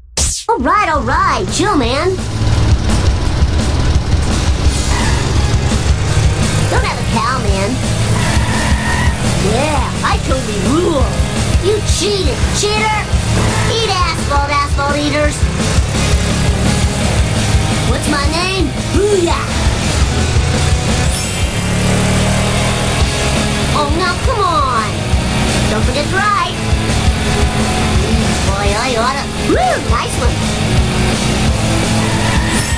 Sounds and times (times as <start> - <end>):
Music: 0.0 - 32.7
Speech: 0.2 - 2.2, 6.7 - 7.8, 9.4 - 15.4, 17.8 - 19.5, 23.8 - 25.0, 25.7 - 26.6, 28.4 - 30.4.